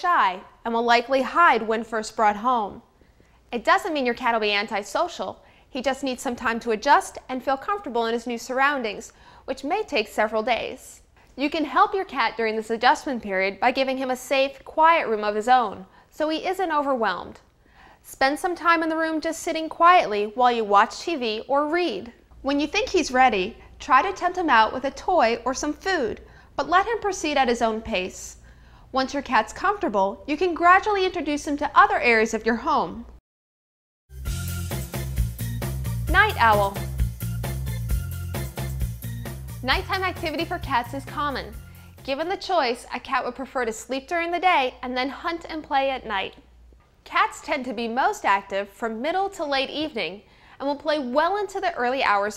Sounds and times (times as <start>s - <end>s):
Speech: 0.0s - 2.9s, 3.5s - 17.4s, 18.1s - 28.4s, 29.0s - 33.1s, 36.1s - 36.8s, 39.6s - 46.4s, 47.1s - 52.3s.